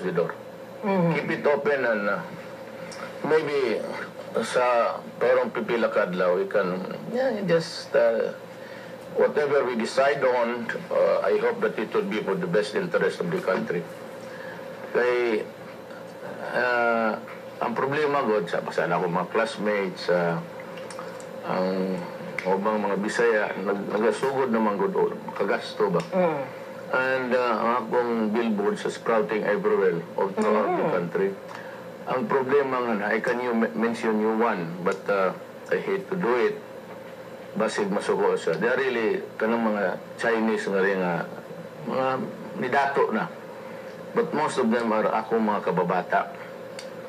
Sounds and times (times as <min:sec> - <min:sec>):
Speech: 0:00.0 - 0:02.3, 0:03.2 - 0:08.4, 0:09.2 - 0:13.9, 0:14.9 - 0:15.5, 0:16.3 - 0:20.5, 0:21.4 - 0:31.4, 0:32.1 - 0:36.6, 0:37.6 - 0:43.4, 0:44.1 - 0:46.5.